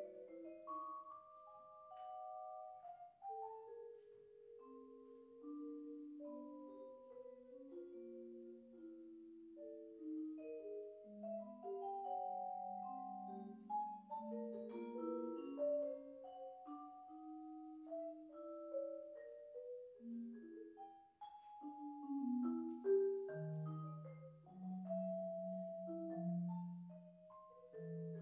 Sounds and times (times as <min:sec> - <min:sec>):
Vibraphone: 0:00.0 - 0:28.2.